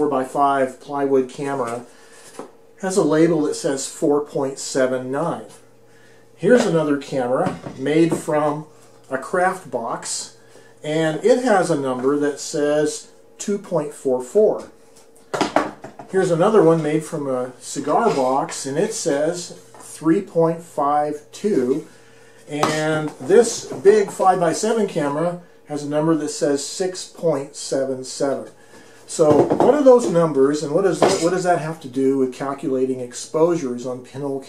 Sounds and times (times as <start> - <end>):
Speech: 0.0 - 1.9, 2.8 - 5.6, 6.4 - 14.8, 16.1 - 21.9, 22.5 - 34.4.